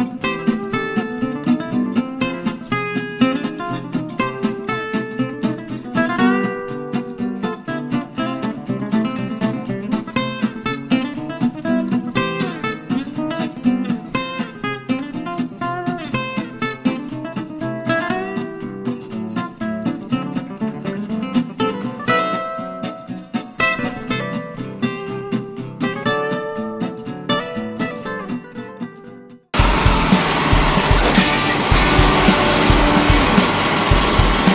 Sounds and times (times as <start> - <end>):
Music: 0.0 - 34.5.